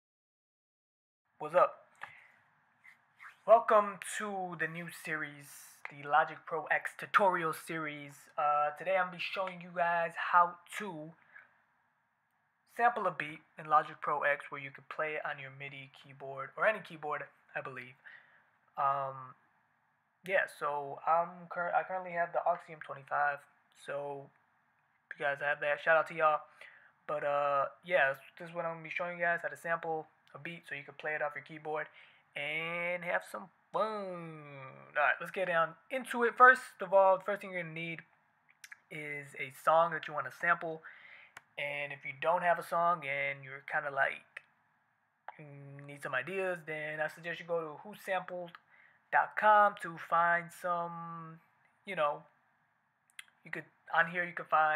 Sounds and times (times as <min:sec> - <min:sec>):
Speech: 0:01.4 - 0:01.9, 0:03.4 - 0:11.2, 0:12.7 - 0:18.2, 0:18.8 - 0:19.4, 0:20.2 - 0:24.4, 0:25.1 - 0:40.9, 0:41.6 - 0:44.5, 0:45.3 - 0:52.4, 0:53.2 - 0:54.7.